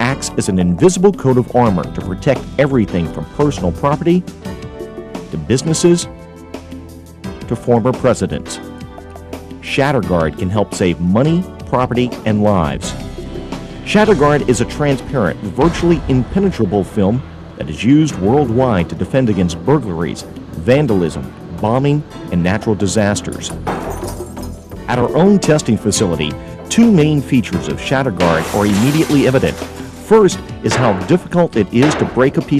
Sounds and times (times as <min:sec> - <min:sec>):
Speech: 0:00.0 - 0:04.3, 0:05.3 - 0:06.1, 0:07.5 - 0:08.7, 0:09.6 - 0:13.0, 0:13.9 - 0:23.6, 0:24.9 - 0:32.5
Music: 0:00.0 - 0:32.5.